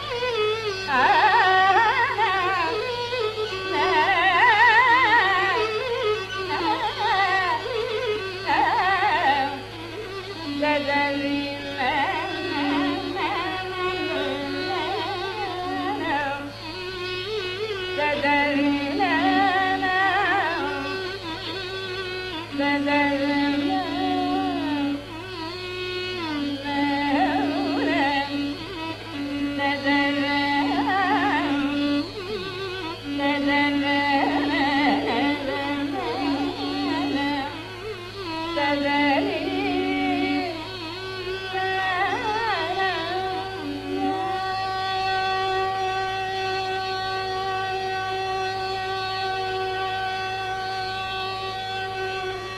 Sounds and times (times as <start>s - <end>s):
Carnatic music: 0.0s - 52.5s.